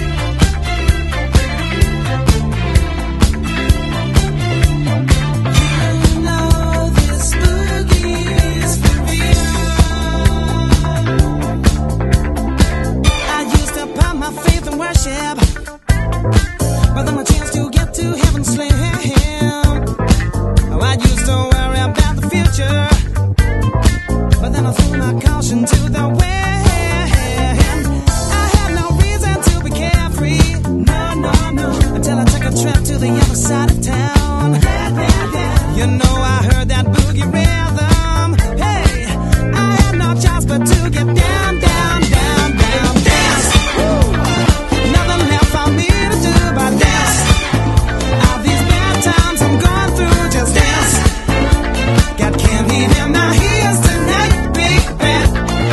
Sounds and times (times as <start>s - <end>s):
Disco: 0.0s - 55.7s
Funk: 0.0s - 55.7s
Rhythm and blues: 0.0s - 55.7s.